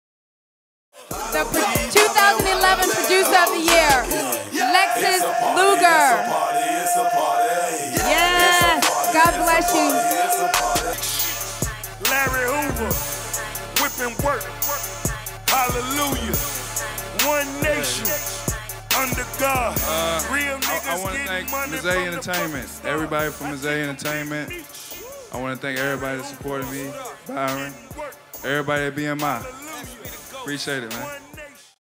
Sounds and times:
Music: 1.0s - 31.8s
Speech: 1.4s - 6.3s, 8.0s - 10.2s, 19.8s - 24.6s, 25.4s - 31.2s.

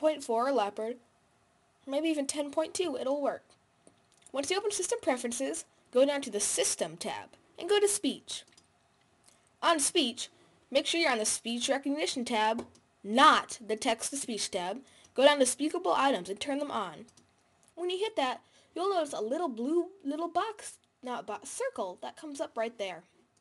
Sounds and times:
Female speech, woman speaking: 0.0s - 1.0s, 1.9s - 3.5s, 4.3s - 8.5s, 9.6s - 17.1s, 17.8s - 23.1s
Narration, monologue: 0.0s - 23.4s.

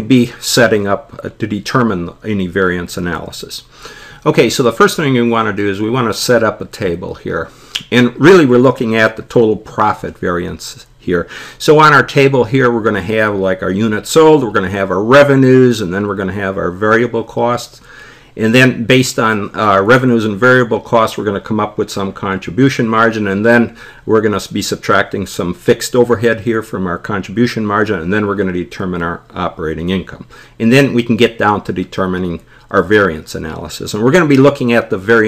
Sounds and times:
Speech: 0.0s - 17.8s, 18.4s - 35.2s.

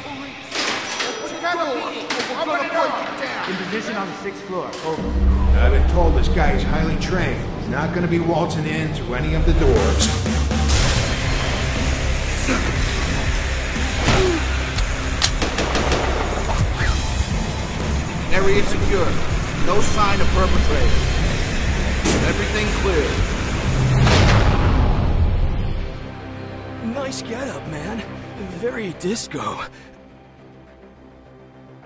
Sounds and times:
Music: 0.0s - 31.8s.

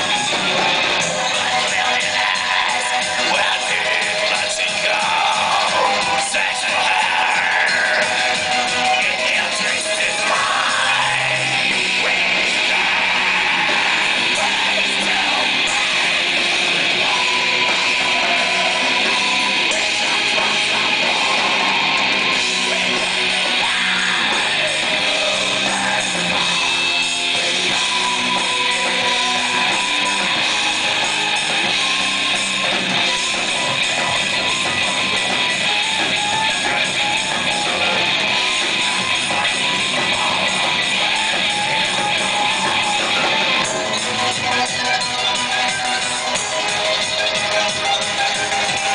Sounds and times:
Techno: 0.0s - 48.9s.

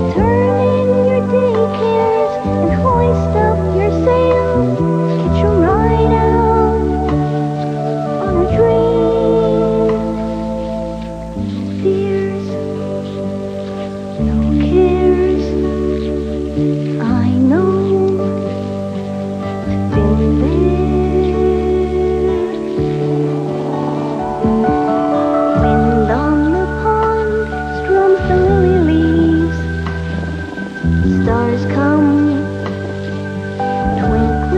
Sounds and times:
Lullaby: 0.0s - 34.5s.

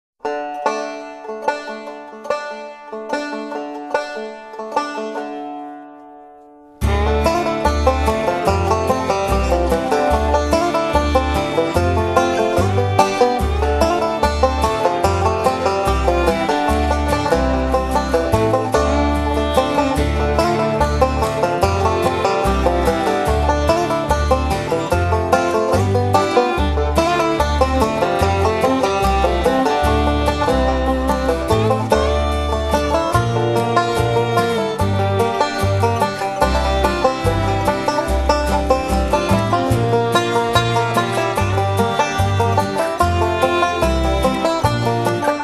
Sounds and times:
Banjo: 0.2s - 45.4s.

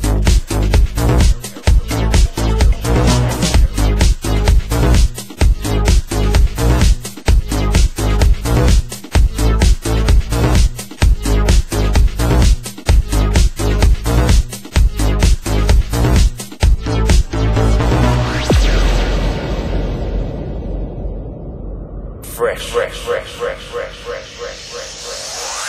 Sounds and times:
Music: 0.0s - 22.1s
Speech: 22.2s - 25.2s.

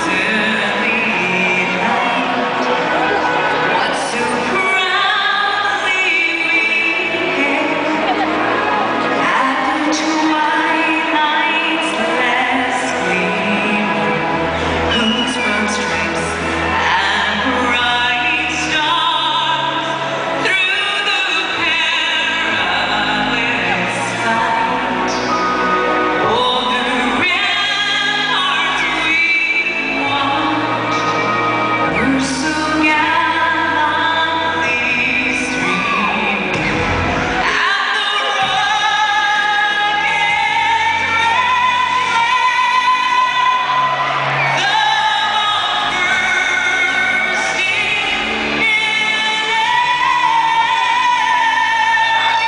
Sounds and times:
Female singing: 0.0s - 36.8s, 37.4s - 52.4s
Music: 0.0s - 52.4s.

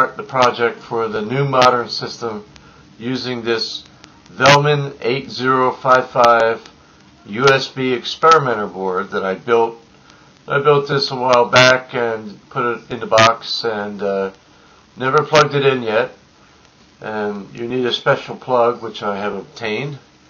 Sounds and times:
Male speech, man speaking: 0.0s - 9.8s, 10.5s - 14.4s, 15.0s - 16.2s, 17.0s - 20.0s
Narration, monologue: 0.0s - 20.3s.

